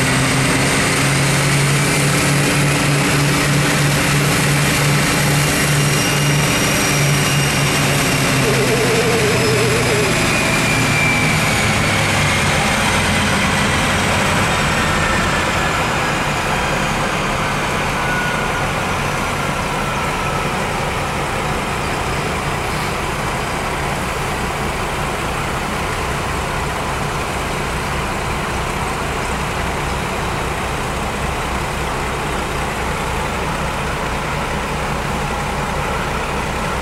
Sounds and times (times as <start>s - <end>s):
Heavy engine (low frequency): 0.0s - 36.8s
Idling: 0.0s - 36.8s
Vehicle: 0.0s - 36.8s.